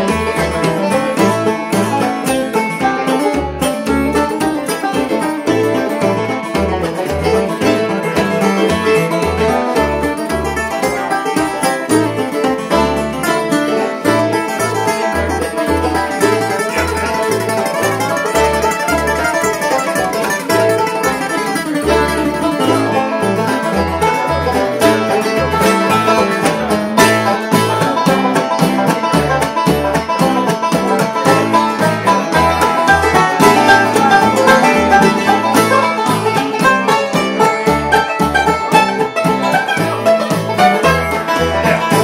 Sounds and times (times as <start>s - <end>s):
Cello: 0.0s - 42.0s
Pizzicato: 0.0s - 42.0s.